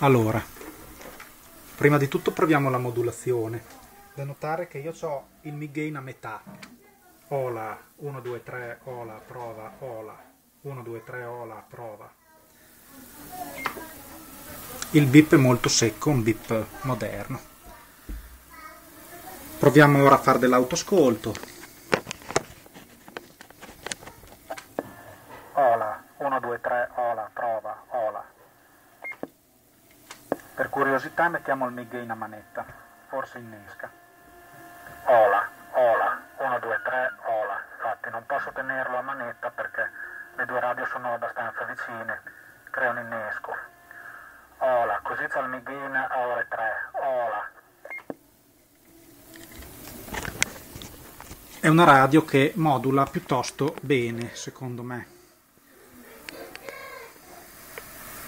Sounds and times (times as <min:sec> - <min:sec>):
Radio: 0:00.0 - 0:12.1, 0:12.9 - 0:18.2, 0:19.0 - 0:29.4, 0:30.1 - 0:48.2, 0:49.1 - 0:58.2.